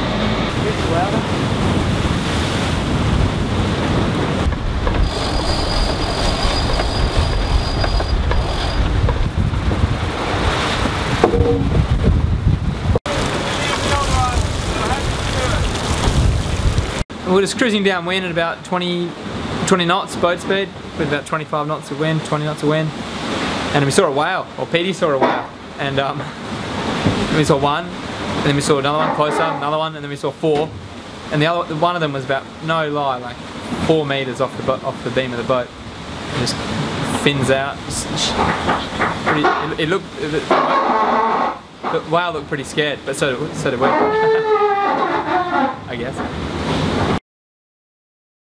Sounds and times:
Wind noise (microphone): 0:00.5 - 0:17.0
Speech: 0:00.6 - 0:01.3, 0:13.5 - 0:15.6, 0:17.2 - 0:23.0, 0:23.7 - 0:26.3, 0:27.3 - 0:30.7, 0:31.3 - 0:35.7, 0:36.4 - 0:38.4, 0:39.3 - 0:40.5, 0:41.9 - 0:44.4, 0:45.9 - 0:46.3.

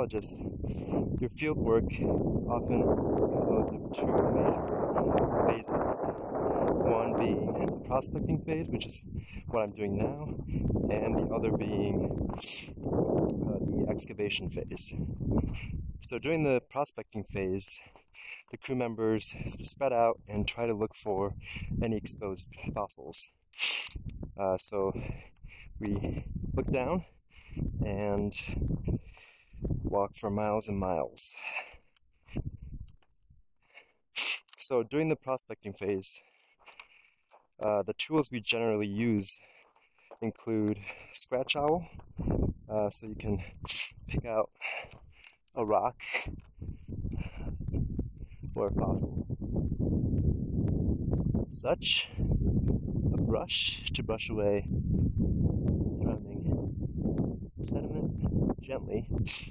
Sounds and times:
Speech: 0:00.0 - 0:00.4, 0:01.2 - 0:04.7, 0:05.4 - 0:06.1, 0:06.8 - 0:12.7, 0:13.4 - 0:15.0, 0:16.0 - 0:17.9, 0:18.5 - 0:23.3, 0:24.4 - 0:25.2, 0:25.8 - 0:27.1, 0:27.8 - 0:28.6, 0:29.9 - 0:31.5, 0:34.6 - 0:36.2, 0:37.6 - 0:39.4, 0:40.2 - 0:41.9, 0:42.7 - 0:43.5, 0:44.1 - 0:44.6, 0:45.6 - 0:46.3, 0:48.6 - 0:49.1, 0:51.5 - 0:52.2, 0:53.2 - 0:54.7, 0:55.9 - 0:56.6, 0:57.6 - 0:59.1.

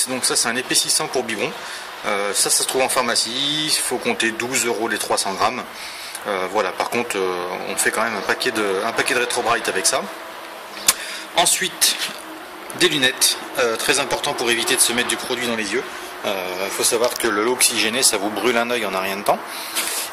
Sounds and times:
Speech: 0:00.0 - 0:10.1, 0:11.4 - 0:19.5.

